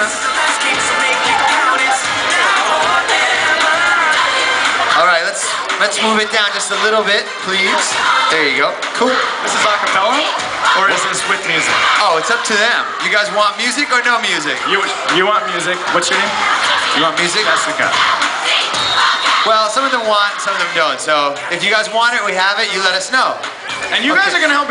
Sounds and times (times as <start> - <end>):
Female singing: 0.0 - 6.1
Music: 0.0 - 24.7.